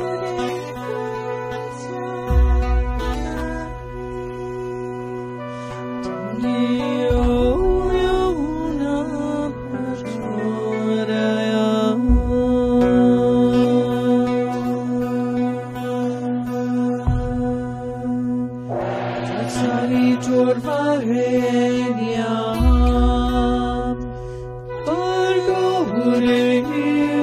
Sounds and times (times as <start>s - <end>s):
Mantra: 0.0s - 27.2s.